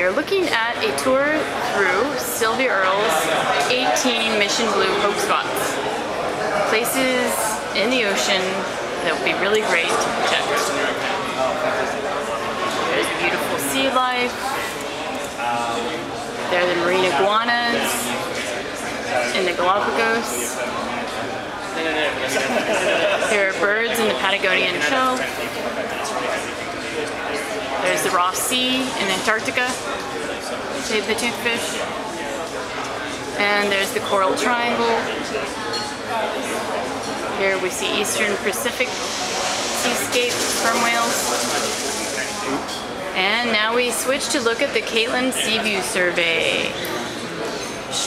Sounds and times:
Speech: 0.0 - 48.0.

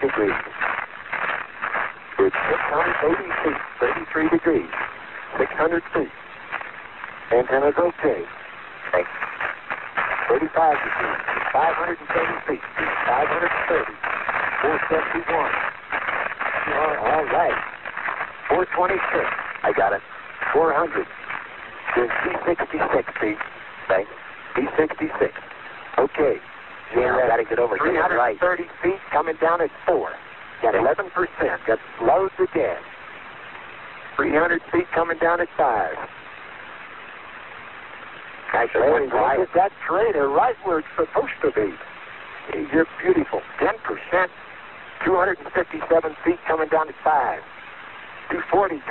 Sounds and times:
Radio: 0.0 - 33.0, 34.0 - 36.2, 38.0 - 48.9.

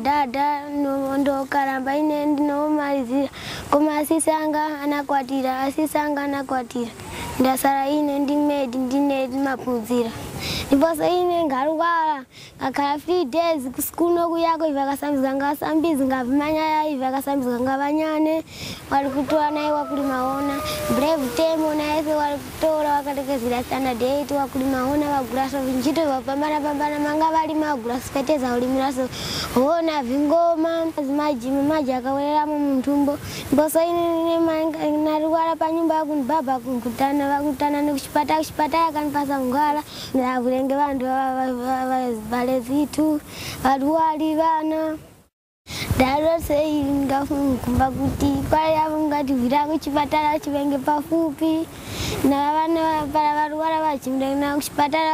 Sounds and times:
Child speech, kid speaking: 0.0 - 45.1, 46.0 - 55.1.

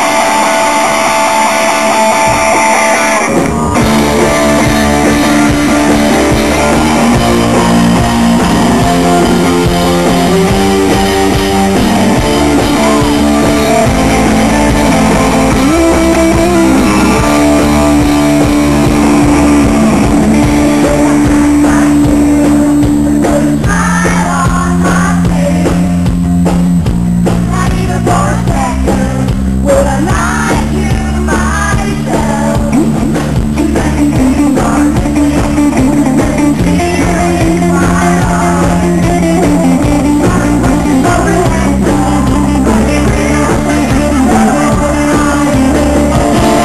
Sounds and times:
Music: 0.0 - 46.6.

